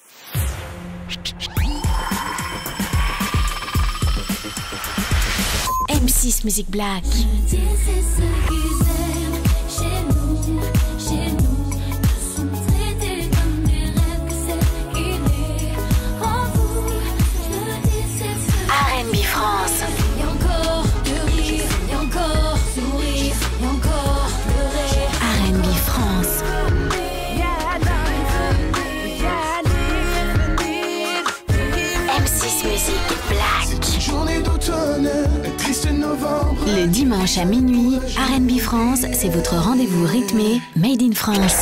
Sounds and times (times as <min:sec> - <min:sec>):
Music: 0:00.0 - 0:41.6
Speech: 0:05.9 - 0:07.6, 0:18.7 - 0:19.4, 0:25.2 - 0:26.4, 0:36.6 - 0:41.6.